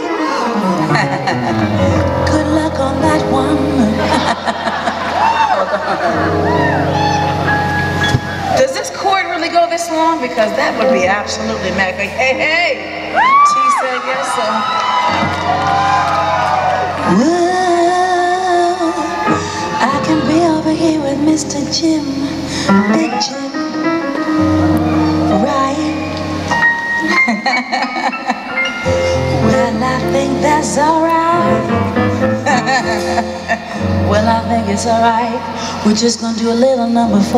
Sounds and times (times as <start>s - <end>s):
Music: 0.0s - 37.3s.